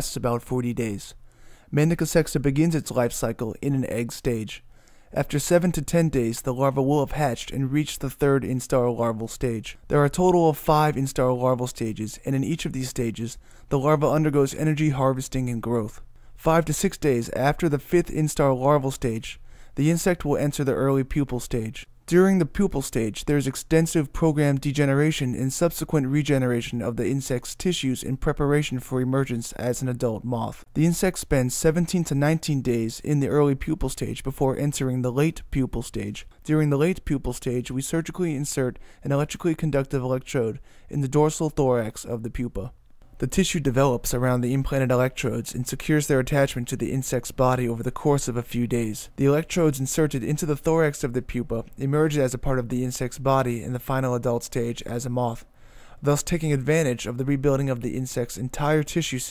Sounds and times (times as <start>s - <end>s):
Speech: 0.0s - 59.3s.